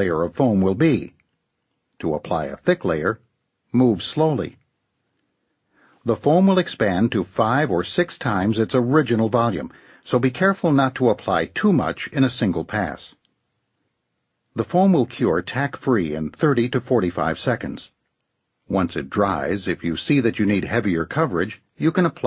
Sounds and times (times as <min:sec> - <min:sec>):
Speech: 0:00.0 - 0:01.2, 0:02.0 - 0:04.6, 0:06.0 - 0:13.2, 0:14.6 - 0:18.0, 0:18.7 - 0:22.2.